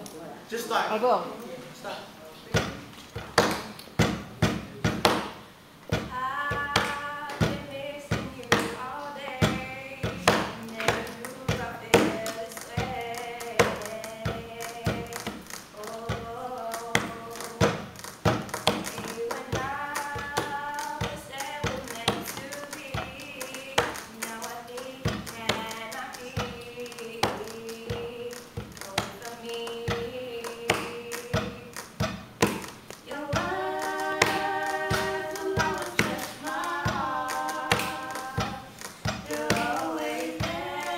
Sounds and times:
Female singing: 6.0s - 17.8s, 18.6s - 31.9s, 33.0s - 40.9s.

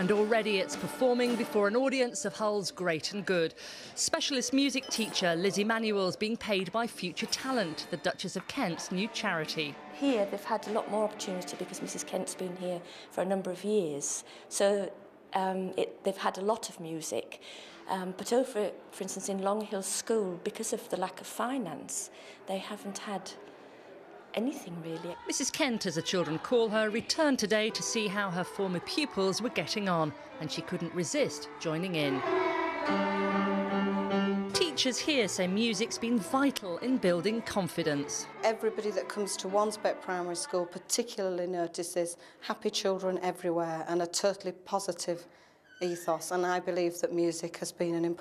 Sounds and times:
Speech: 24.4s - 32.2s, 34.6s - 45.2s, 45.8s - 48.2s.

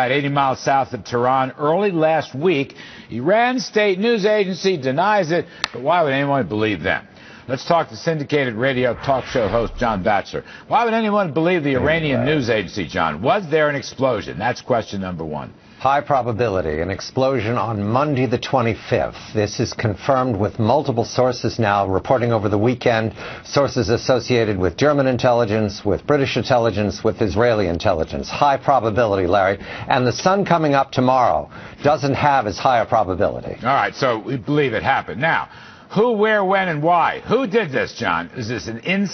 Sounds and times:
Speech: 0.0s - 39.1s.

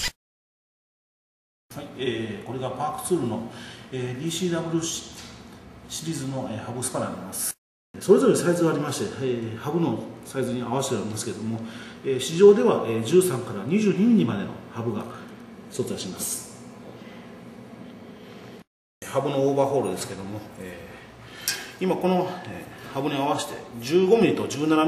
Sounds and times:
Speech: 1.7s - 16.6s, 19.0s - 21.1s, 21.8s - 24.8s.

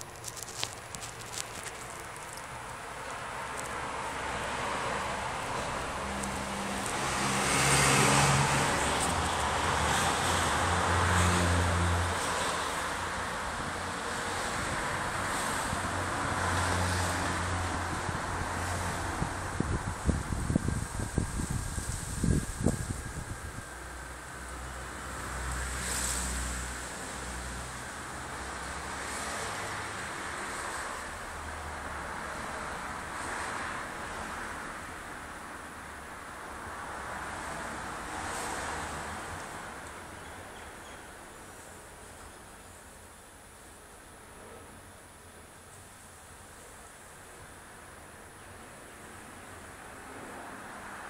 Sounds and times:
Motor vehicle (road): 0.0s - 51.0s.

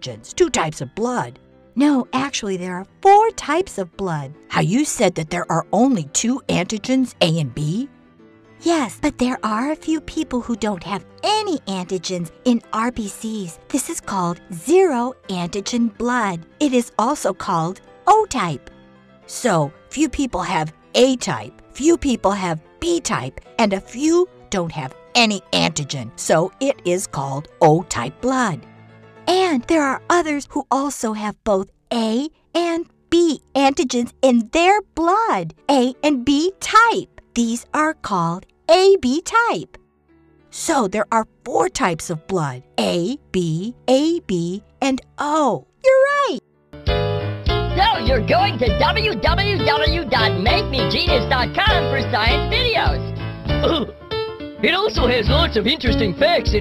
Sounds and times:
Narration, monologue: 0.0s - 56.6s.

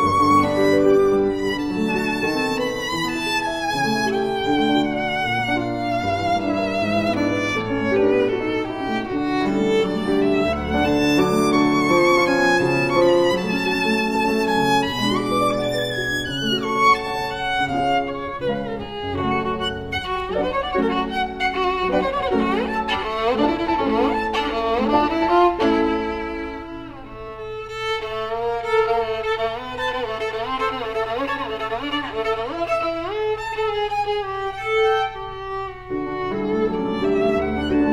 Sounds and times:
Violin, fiddle: 0.0s - 37.9s.

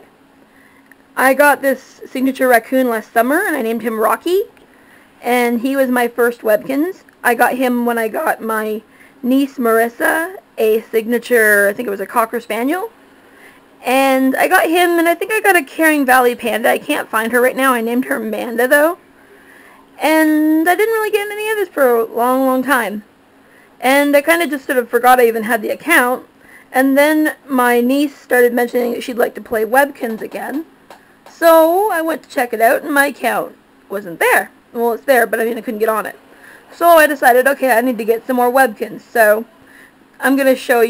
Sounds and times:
Speech: 1.2s - 4.5s, 5.2s - 12.9s, 13.8s - 19.0s, 20.0s - 23.1s, 23.8s - 30.7s, 31.3s - 39.5s, 40.2s - 40.9s.

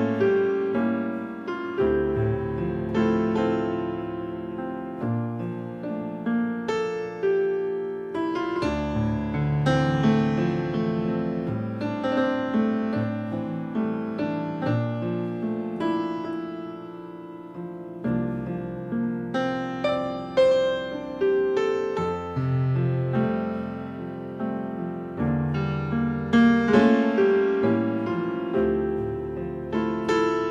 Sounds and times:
Music: 0.0s - 30.5s.

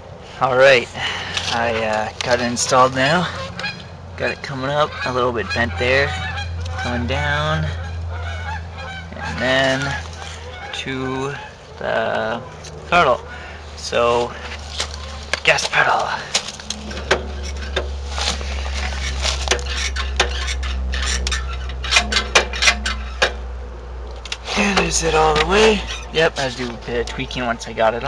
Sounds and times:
Outside, rural or natural: 0.0s - 28.0s
Speech: 1.5s - 3.3s, 4.2s - 6.2s, 6.8s - 7.8s, 9.2s - 10.0s, 10.7s - 13.2s, 13.8s - 14.3s, 15.4s - 16.3s, 24.5s - 28.0s.

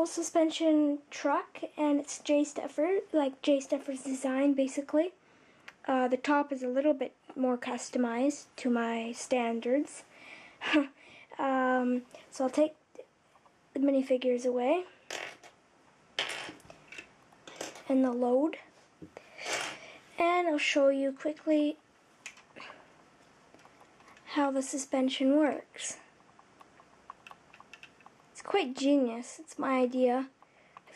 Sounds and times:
Speech: 0.0s - 5.2s, 5.8s - 13.1s, 13.8s - 14.9s, 17.8s - 18.7s, 20.2s - 21.8s, 24.3s - 26.0s, 28.4s - 30.9s.

